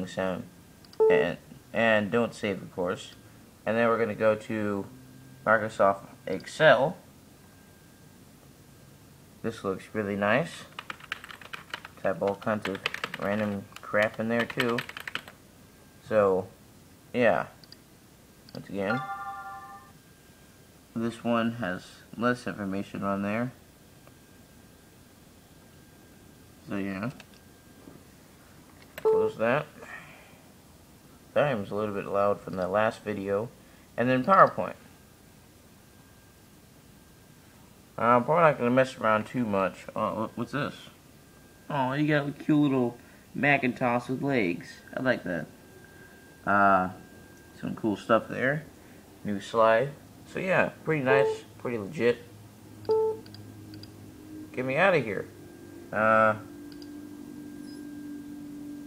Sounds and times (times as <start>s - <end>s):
Typing: 10.7s - 15.4s.